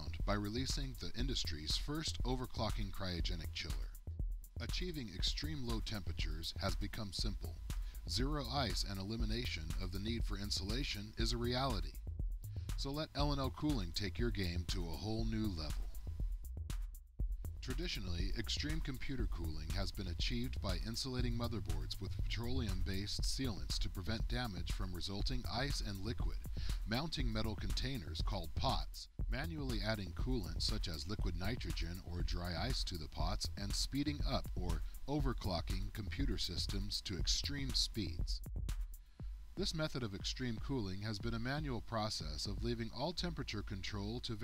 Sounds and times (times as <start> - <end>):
Speech: 0.0 - 4.0, 4.6 - 12.0, 12.8 - 15.9, 17.6 - 38.4, 39.6 - 44.4
Music: 0.0 - 44.4.